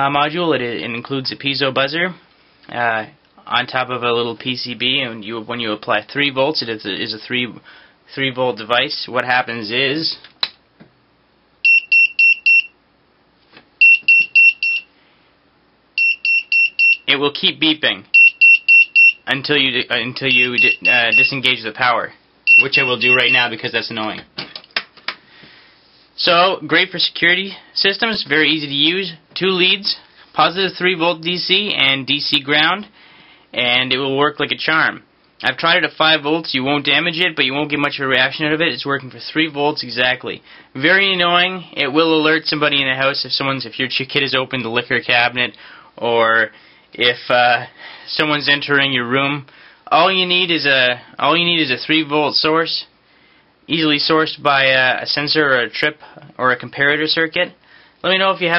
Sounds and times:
Speech: 0:00.0 - 0:10.3, 0:17.1 - 0:18.1, 0:19.3 - 0:24.3, 0:26.2 - 0:32.9, 0:33.5 - 0:52.9, 0:53.7 - 0:58.5
Beep, bleep: 0:11.6 - 0:12.8, 0:13.8 - 0:14.9, 0:16.0 - 0:17.0, 0:18.1 - 0:19.2, 0:20.3 - 0:21.3, 0:22.5 - 0:23.4.

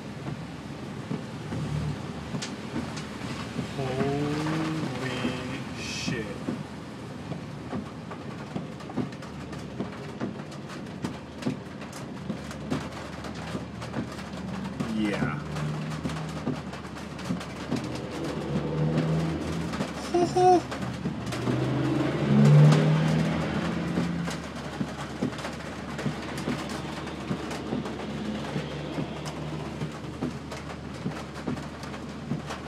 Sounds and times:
Speech: 0:03.8 - 0:06.4, 0:14.9 - 0:15.4.

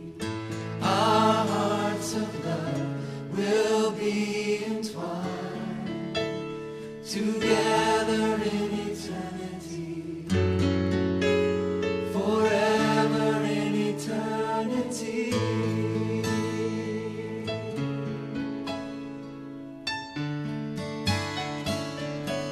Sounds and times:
Music: 0:00.0 - 0:22.5.

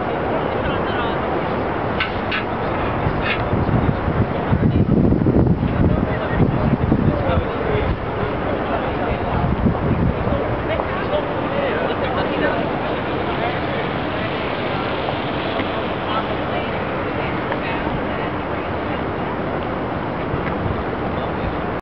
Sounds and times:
Speech: 0:00.0 - 0:21.8.

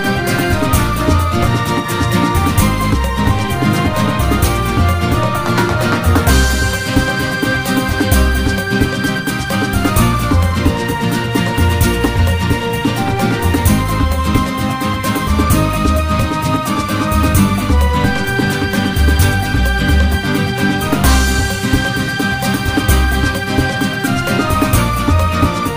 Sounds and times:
Theme music: 0:00.0 - 0:25.7.

